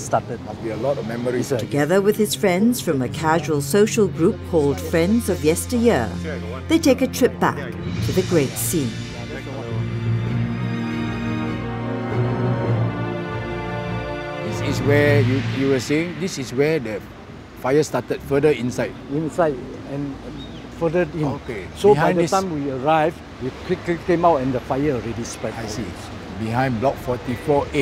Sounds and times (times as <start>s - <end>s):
Male speech, man speaking: 0.0s - 1.8s, 4.2s - 5.1s, 6.2s - 6.7s, 7.5s - 7.8s, 9.1s - 9.8s, 14.4s - 27.8s
Conversation: 0.0s - 27.8s
Music: 1.5s - 16.8s
Female speech, woman speaking: 1.6s - 9.0s.